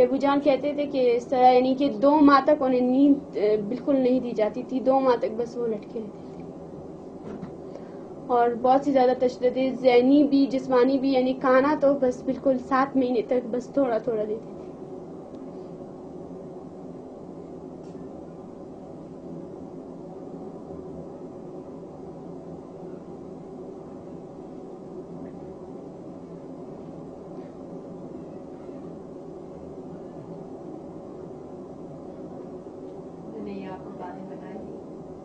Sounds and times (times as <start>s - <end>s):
Speech: 0.0s - 6.2s, 8.3s - 14.5s, 33.3s - 34.8s.